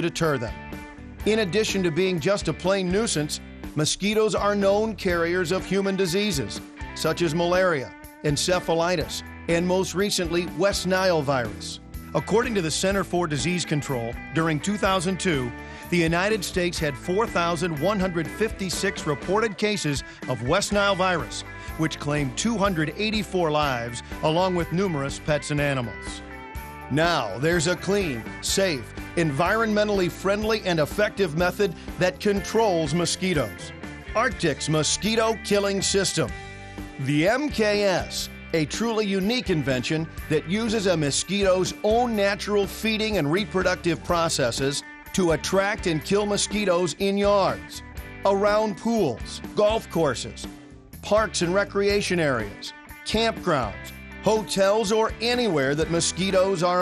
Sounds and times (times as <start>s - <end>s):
Speech: 0.0s - 0.6s, 1.2s - 26.2s, 26.9s - 36.3s, 37.0s - 56.8s
Music: 0.0s - 56.8s.